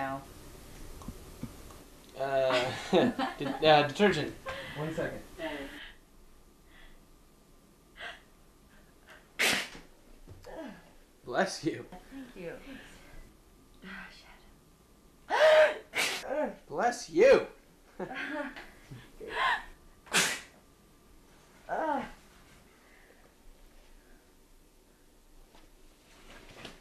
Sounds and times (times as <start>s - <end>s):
Sneeze: 9.4s - 9.9s, 15.3s - 16.3s, 20.1s - 20.6s.